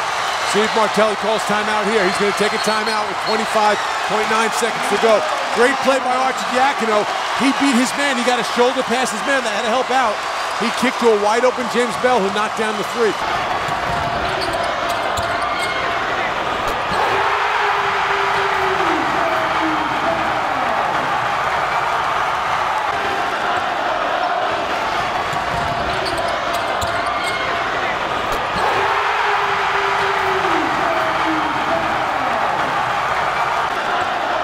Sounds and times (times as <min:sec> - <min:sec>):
Crowd: 0:00.0 - 0:34.4.